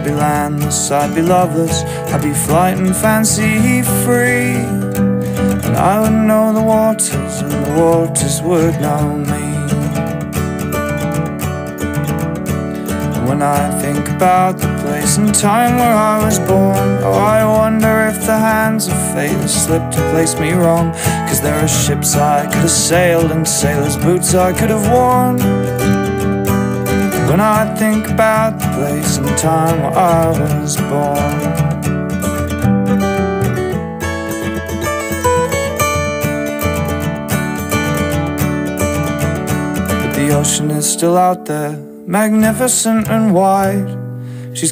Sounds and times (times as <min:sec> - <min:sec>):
Acoustic guitar: 0:00.0 - 0:44.7.